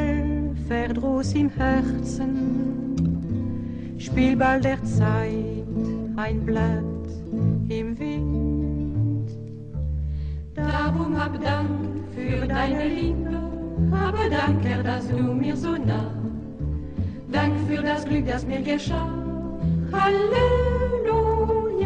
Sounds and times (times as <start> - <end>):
Female singing: 0.0 - 3.1, 4.0 - 7.0, 7.7 - 9.2, 10.6 - 16.3, 17.3 - 21.8
Choir: 10.6 - 16.6, 17.3 - 21.8.